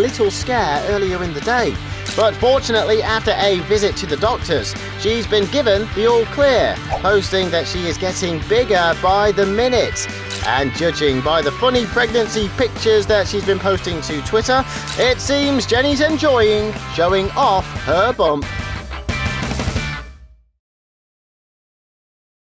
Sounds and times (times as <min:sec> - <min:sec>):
Speech: 0:00.0 - 0:18.5
Music: 0:00.0 - 0:20.6.